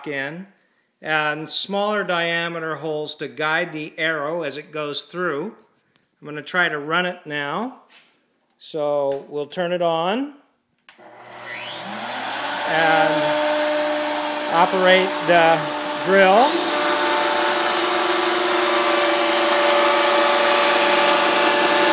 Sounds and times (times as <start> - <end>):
Speech: 0.0 - 5.6, 6.2 - 7.9, 8.6 - 10.4, 12.7 - 13.3, 14.5 - 16.7.